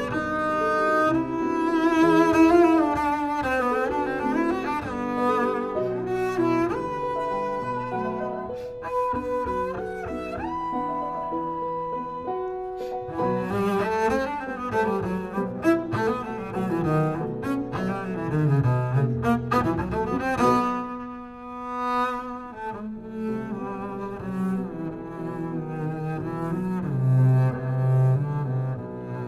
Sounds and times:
Cello: 0:00.0 - 0:29.2.

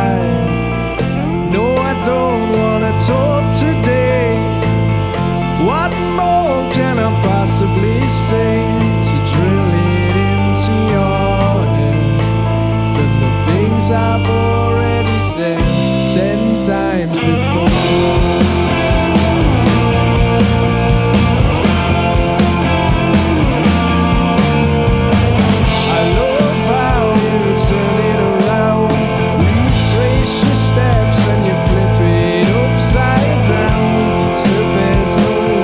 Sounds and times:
Music: 0:00.0 - 0:35.6.

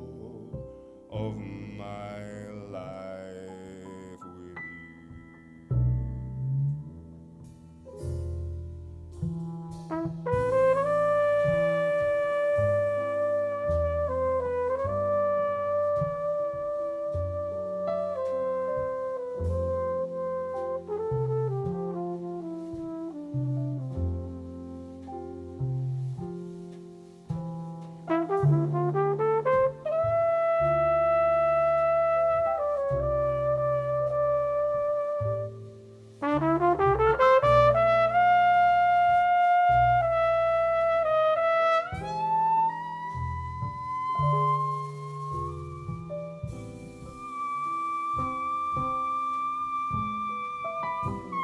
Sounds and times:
Trumpet: 0:00.0 - 0:04.8, 0:07.4 - 0:51.4.

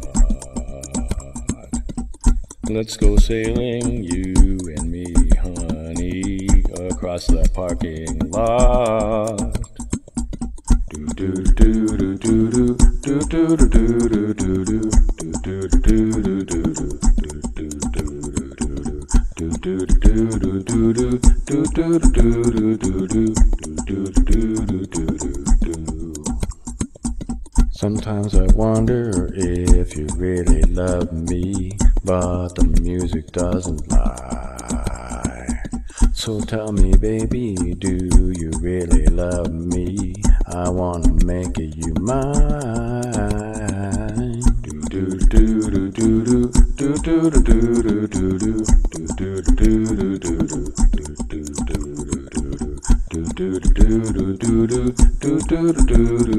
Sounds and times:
Music: 0:00.0 - 0:56.3.

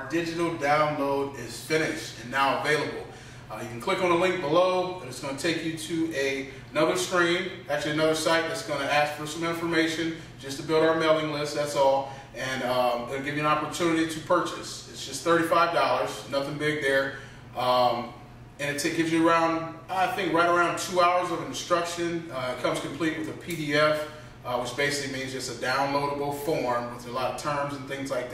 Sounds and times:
Speech: 0:00.0 - 0:28.3.

